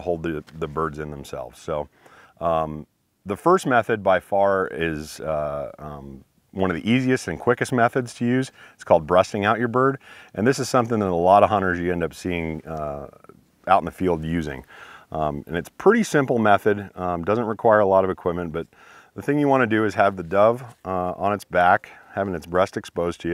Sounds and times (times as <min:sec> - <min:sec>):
Speech: 0:00.0 - 0:23.3.